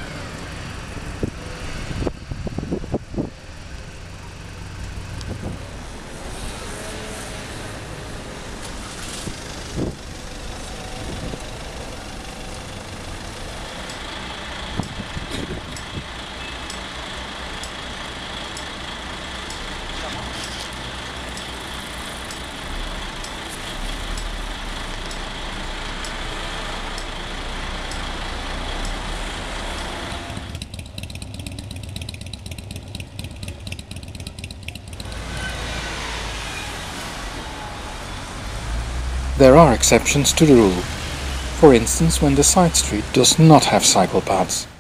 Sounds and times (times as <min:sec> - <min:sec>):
Traffic noise, roadway noise: 0:00.0 - 0:44.8.